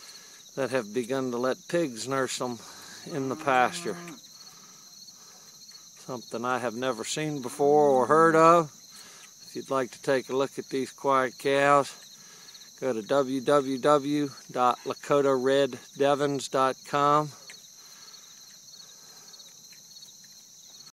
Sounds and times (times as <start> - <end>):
Speech: 0.6 - 3.9, 6.0 - 8.7, 9.5 - 12.0, 12.8 - 17.4.